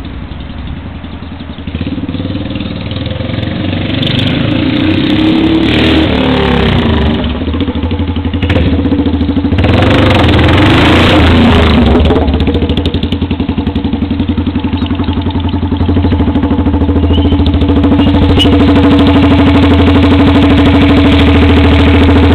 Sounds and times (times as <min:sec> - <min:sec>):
Motorcycle: 0:00.0 - 0:22.3.